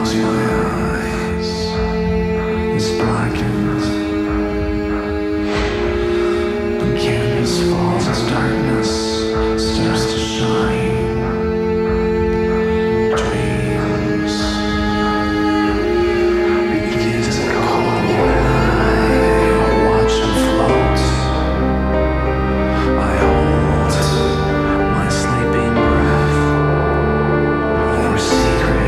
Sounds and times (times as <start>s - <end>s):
Speech: 0.0s - 1.8s, 2.7s - 4.2s, 6.1s - 11.3s, 12.9s - 14.6s, 16.7s - 21.4s, 22.7s - 26.5s, 27.9s - 28.8s
Music: 0.0s - 28.8s.